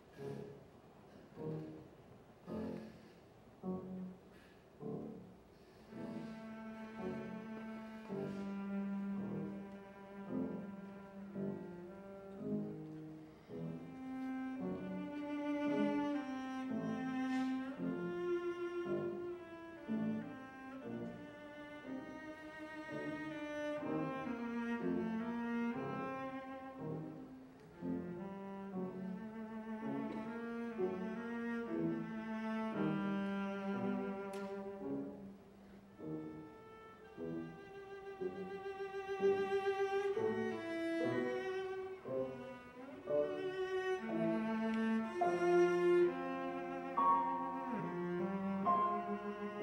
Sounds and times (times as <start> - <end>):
Cello: 0.0 - 49.6.